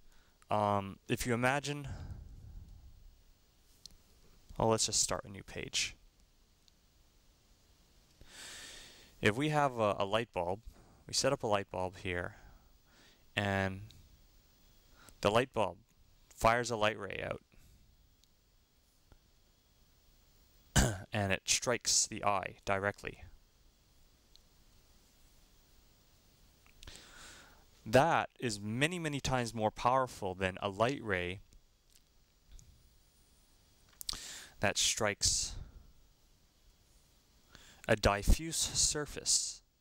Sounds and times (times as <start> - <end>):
Inside, small room: 0.0 - 39.8
Speech: 0.5 - 2.0, 4.6 - 6.0, 9.2 - 12.4, 13.4 - 13.9, 15.2 - 17.5, 20.8 - 23.4, 27.8 - 31.4, 34.6 - 35.7, 37.9 - 39.7.